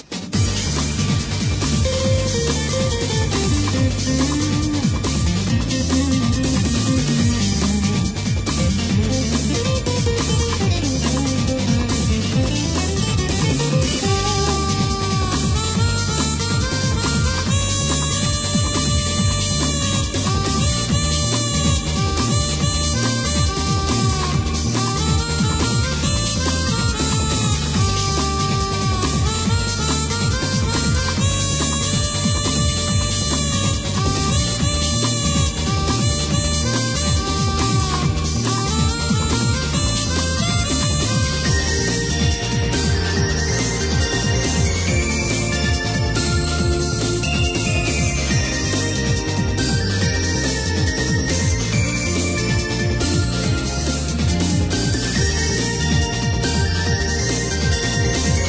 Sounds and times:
Music: 0.0 - 58.4.

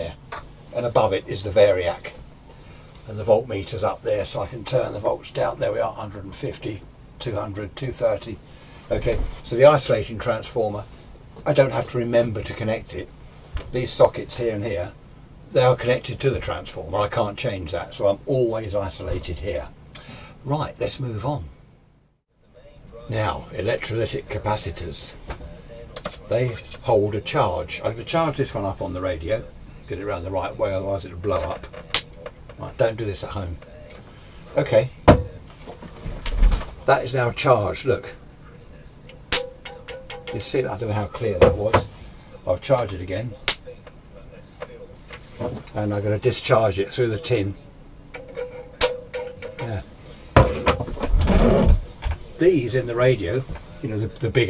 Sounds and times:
Speech: 0.0 - 2.2, 3.1 - 13.1, 13.7 - 19.8, 20.4 - 21.6, 22.4 - 35.8, 36.5 - 39.0, 40.3 - 47.8, 49.6 - 49.9, 52.2 - 54.5
Radio: 29.8 - 32.6, 41.0 - 47.8.

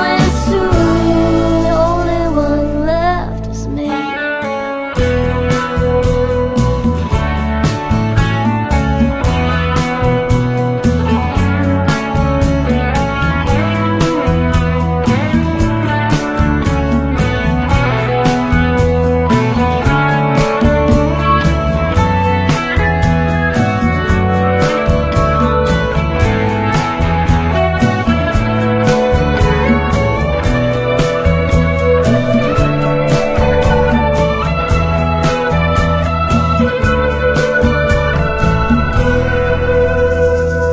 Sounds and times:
Music: 0.0 - 40.7.

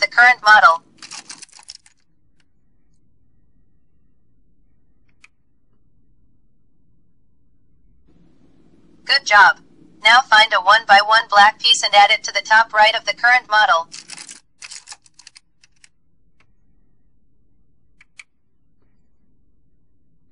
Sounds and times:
Speech: 0.0 - 0.8, 9.1 - 13.9.

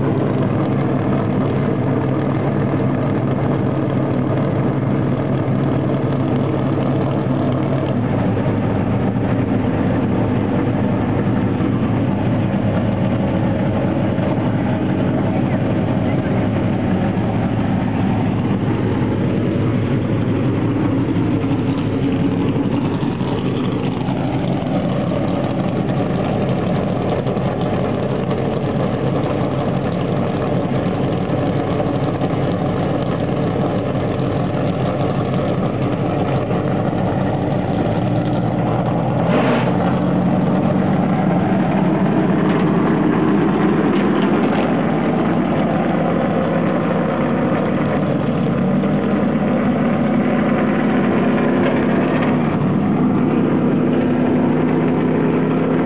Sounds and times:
Car: 0.0 - 55.8
Idling: 0.0 - 55.8.

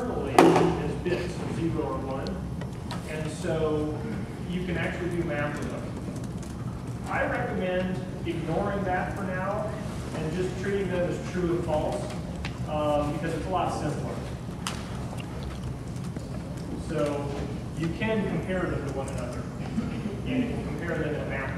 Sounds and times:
Speech: 0.0 - 2.4, 3.1 - 5.9, 7.1 - 14.3, 16.8 - 19.5, 20.2 - 21.5.

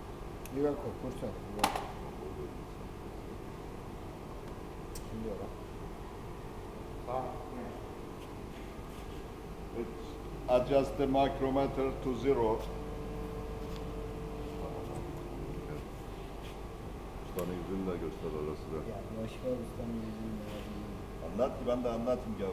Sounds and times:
Speech: 0.5 - 2.8, 9.7 - 12.7, 14.6 - 15.9, 17.3 - 22.5.

